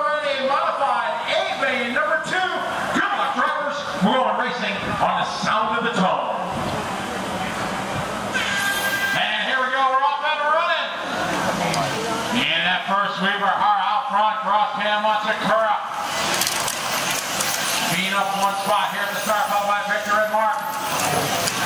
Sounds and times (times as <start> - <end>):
Speech: 0.0 - 6.5, 9.2 - 11.0, 11.6 - 15.9, 17.9 - 21.5.